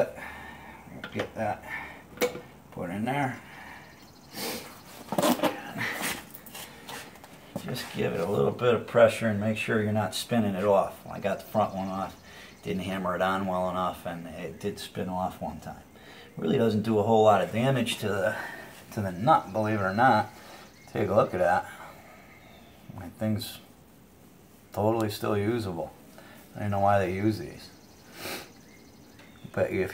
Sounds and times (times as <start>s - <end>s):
Speech: 0.9s - 1.7s, 2.7s - 3.4s, 7.6s - 20.3s, 20.9s - 21.8s, 22.9s - 23.7s, 24.7s - 27.8s, 29.4s - 29.9s.